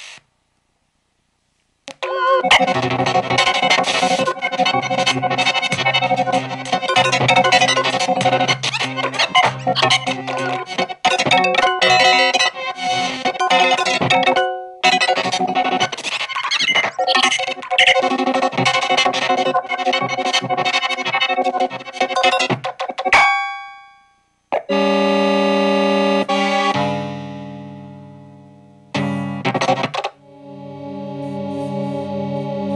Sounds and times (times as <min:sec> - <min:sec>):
Ambient music: 0:02.3 - 0:12.6, 0:30.2 - 0:32.7.